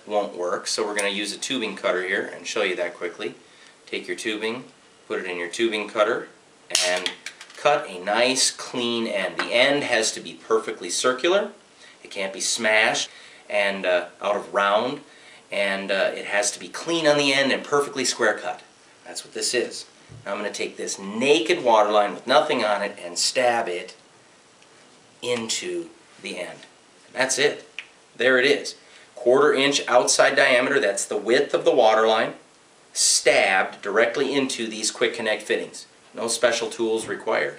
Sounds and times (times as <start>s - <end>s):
Speech: 0.0s - 24.0s, 25.2s - 32.4s, 33.0s - 37.5s.